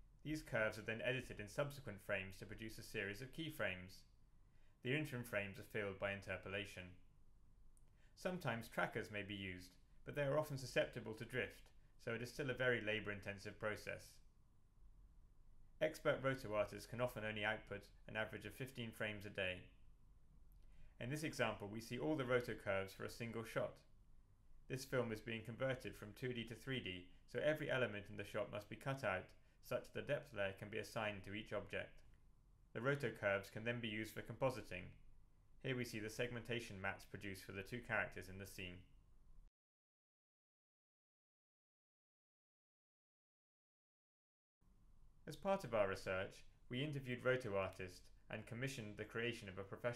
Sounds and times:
Speech: 0:00.2 - 0:04.1, 0:04.8 - 0:07.0, 0:08.2 - 0:14.2, 0:15.8 - 0:19.8, 0:21.0 - 0:23.9, 0:24.7 - 0:32.1, 0:32.8 - 0:35.0, 0:35.6 - 0:38.9, 0:45.3 - 0:49.9.

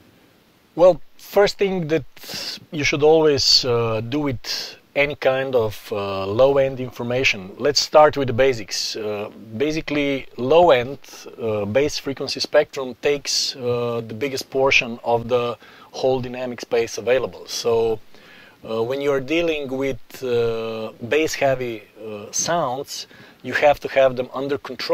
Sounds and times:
Speech: 0:00.8 - 0:18.0, 0:18.6 - 0:24.9.

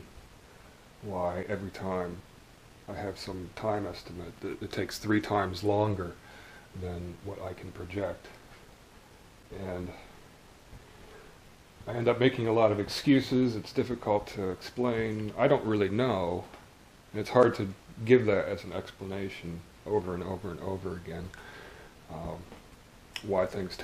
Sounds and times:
Speech: 0:01.0 - 0:02.3, 0:02.9 - 0:06.2, 0:06.8 - 0:08.4, 0:09.5 - 0:10.2, 0:11.8 - 0:21.4, 0:22.1 - 0:22.6, 0:23.2 - 0:23.8.

